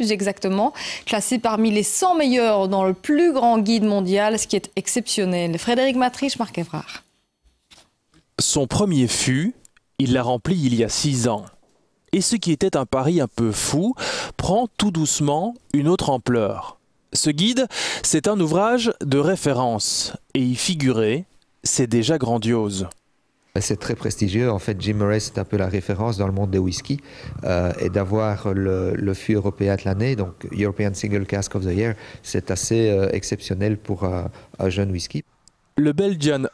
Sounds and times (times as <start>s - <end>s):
Speech: 0.0s - 7.0s, 8.4s - 11.6s, 12.2s - 23.0s, 23.6s - 35.2s, 35.8s - 36.5s.